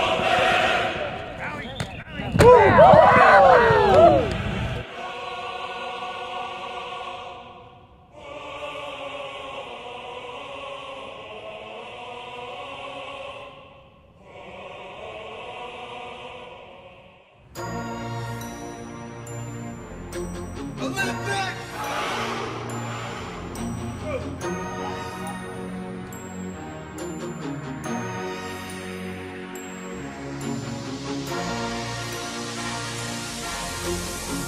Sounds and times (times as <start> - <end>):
Music: 4.8 - 34.4.